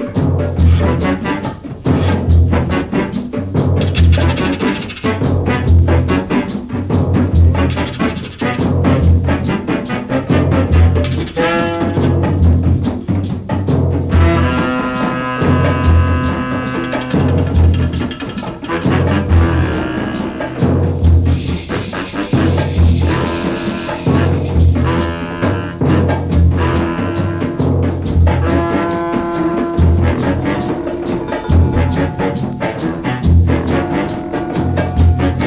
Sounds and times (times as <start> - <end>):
Music: 0.0 - 35.4.